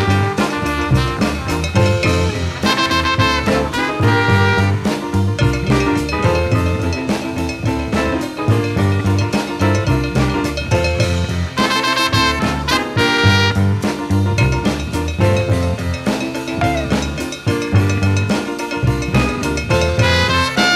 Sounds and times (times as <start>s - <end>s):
Jazz: 0.0s - 20.7s.